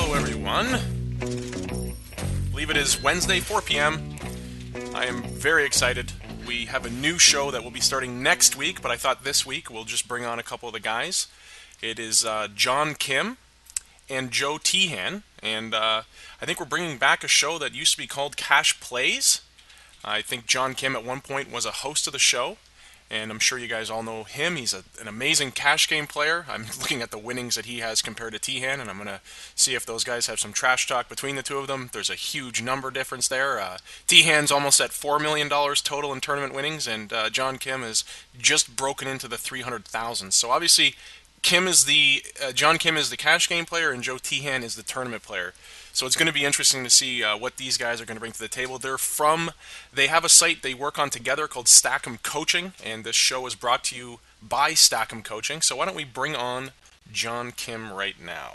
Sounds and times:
Speech: 0.0 - 0.9, 2.5 - 4.0, 4.9 - 13.4, 14.1 - 58.5.

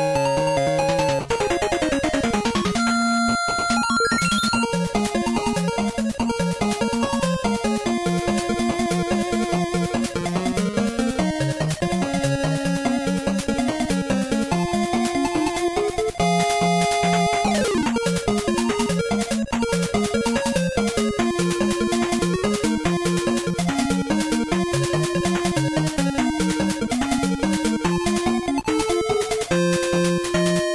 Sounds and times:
Music: 0.0 - 30.7.

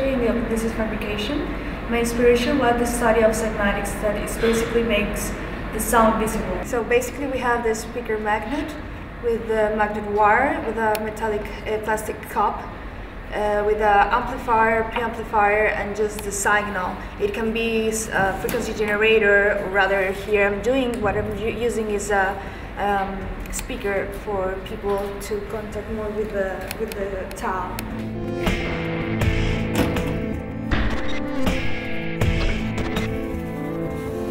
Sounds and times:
Speech: 0.0 - 12.7, 13.3 - 27.8.

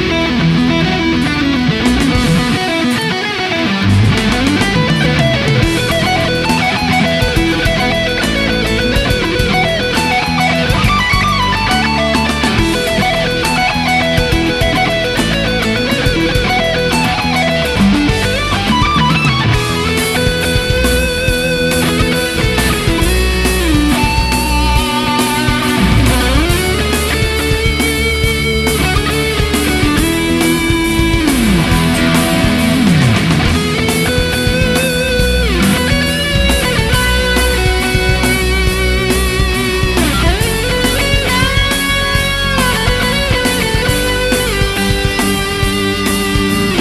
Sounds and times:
Electric guitar: 0.0 - 46.8
Strum: 0.0 - 46.8.

